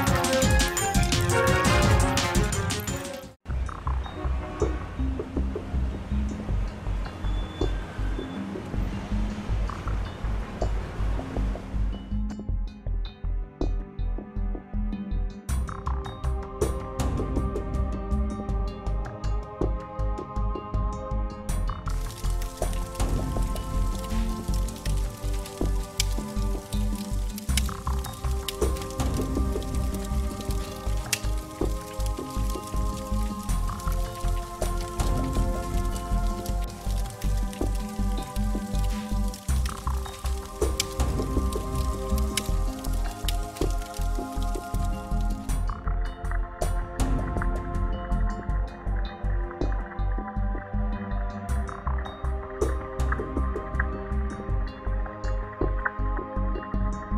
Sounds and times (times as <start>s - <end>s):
Music: 0.0s - 57.1s.